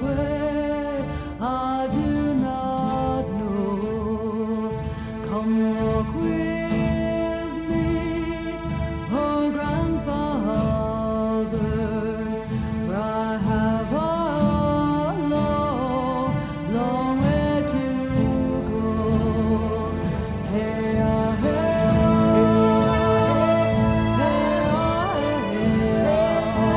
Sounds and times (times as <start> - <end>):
Drum: 21.0 - 26.7.